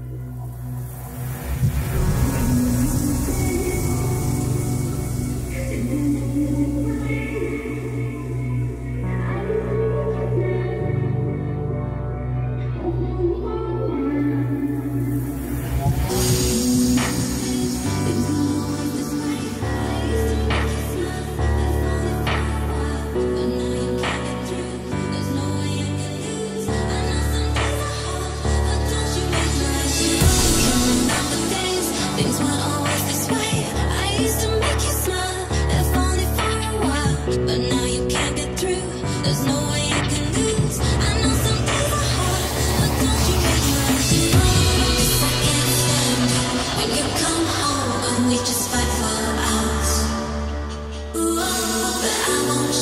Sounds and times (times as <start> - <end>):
Dubstep: 0.0 - 11.8, 14.1 - 52.8.